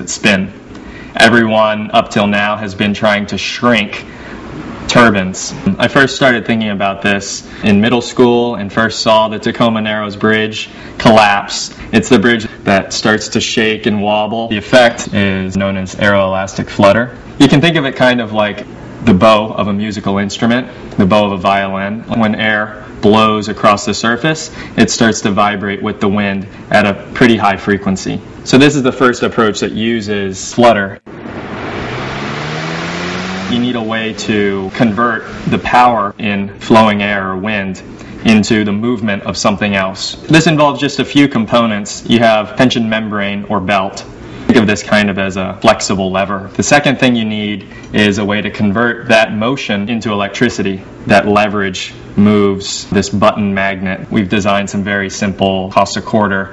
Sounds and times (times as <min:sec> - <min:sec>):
Speech: 0:00.0 - 0:04.1, 0:04.9 - 0:31.1, 0:33.5 - 0:56.5.